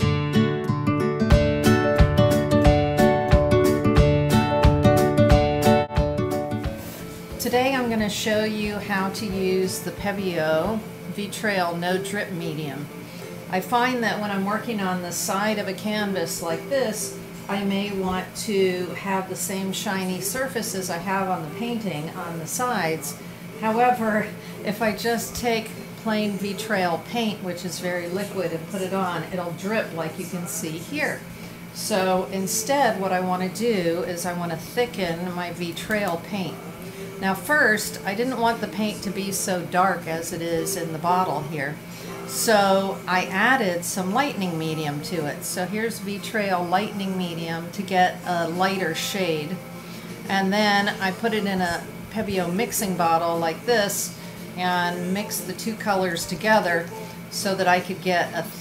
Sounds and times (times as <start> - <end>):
Speech: 7.4 - 12.9, 13.5 - 49.6, 50.3 - 58.6.